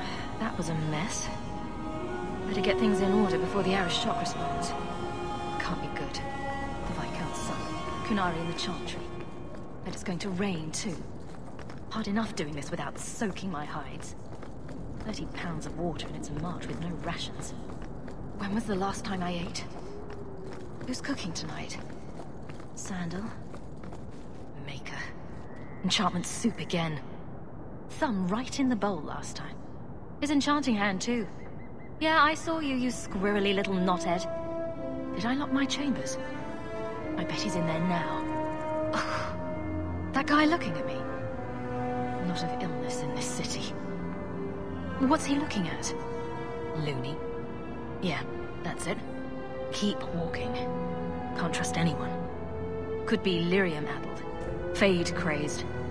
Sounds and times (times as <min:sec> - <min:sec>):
Speech: 0:00.0 - 0:01.4, 0:09.9 - 0:11.1, 0:11.9 - 0:14.2, 0:15.0 - 0:17.6, 0:18.4 - 0:19.8, 0:20.9 - 0:21.8, 0:22.8 - 0:23.4, 0:25.8 - 0:27.1, 0:27.9 - 0:29.6, 0:30.2 - 0:31.4, 0:32.0 - 0:34.3, 0:37.1 - 0:38.3, 0:46.7 - 0:47.2, 0:48.0 - 0:49.1, 0:49.7 - 0:50.7, 0:51.4 - 0:52.2, 0:53.1 - 0:54.1, 0:54.8 - 0:55.6
Music: 0:00.0 - 0:26.7, 0:31.0 - 0:55.9.